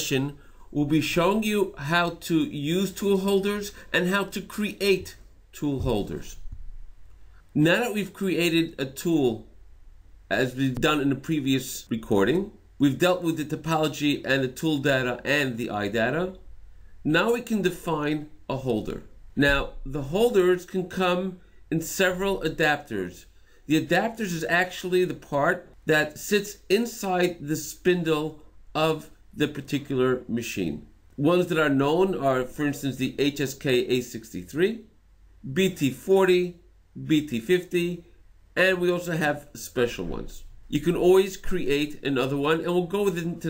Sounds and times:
Speech: 0.0s - 6.4s, 7.6s - 9.5s, 10.3s - 16.4s, 17.1s - 34.9s, 35.5s - 38.0s, 38.6s - 43.5s.

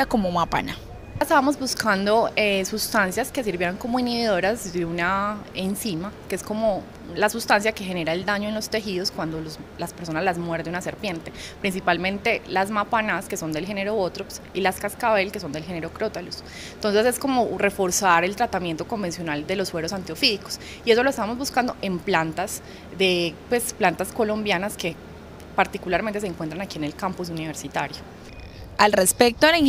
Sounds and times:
Speech: 0.0s - 25.0s, 25.6s - 28.0s, 28.8s - 29.6s.

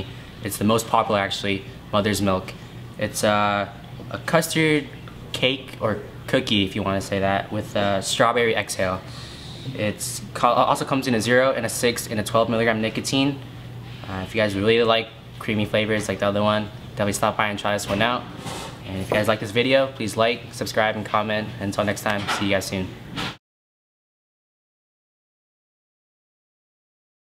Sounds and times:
Speech: 0.0s - 9.1s, 9.7s - 13.4s, 14.0s - 23.0s.

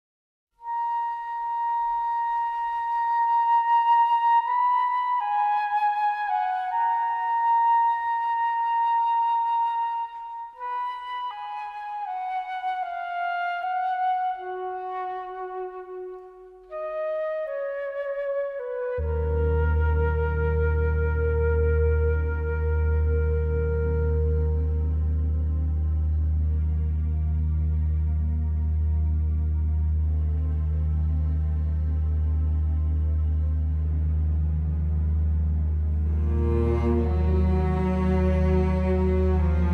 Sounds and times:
Flute: 0.6s - 39.7s.

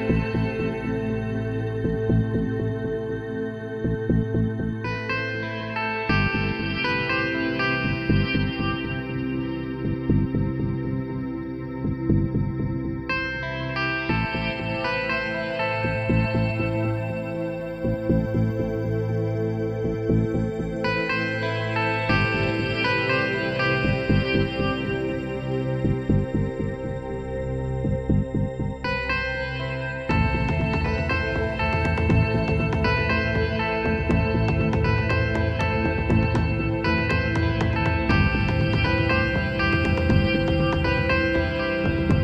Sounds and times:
Ambient music: 0.0s - 42.2s.

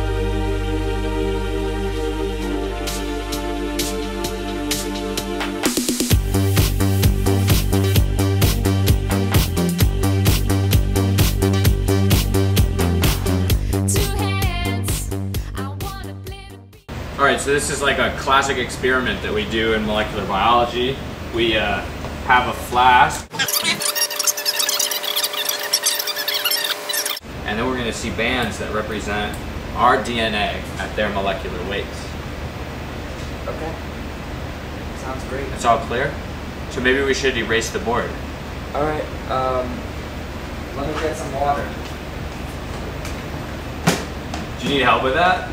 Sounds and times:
Speech: 17.2s - 23.3s, 27.4s - 32.2s, 33.4s - 33.8s, 35.0s - 39.8s, 40.8s - 41.8s, 44.6s - 45.5s.

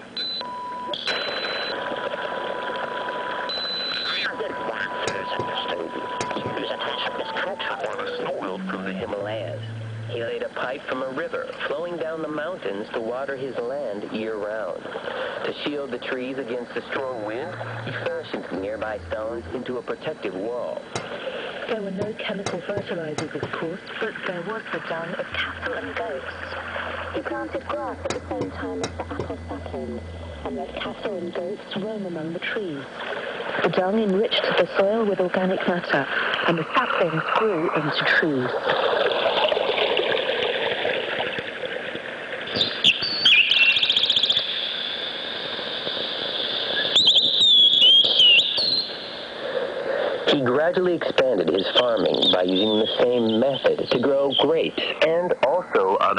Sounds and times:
Radio: 1.0s - 39.6s, 44.2s - 48.2s, 49.4s - 56.1s
Speech: 4.2s - 14.8s, 15.4s - 20.9s, 21.7s - 26.6s, 27.2s - 32.9s, 50.2s - 56.1s.

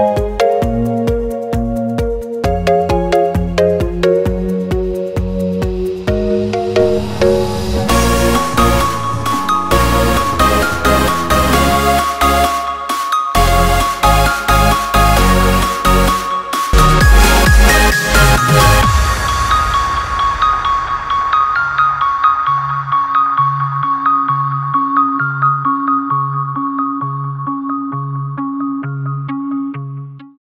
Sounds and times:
Soundtrack music: 2.5s - 24.0s.

